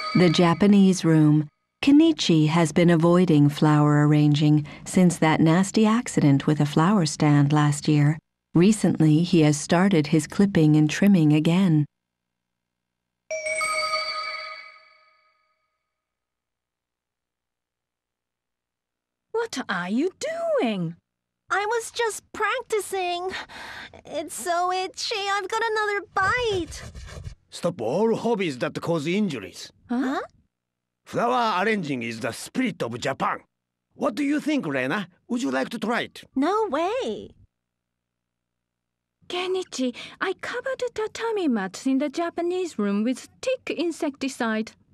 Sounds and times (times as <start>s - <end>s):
Speech: 0.2s - 11.9s, 27.5s - 30.3s, 31.1s - 37.3s, 39.3s - 44.8s.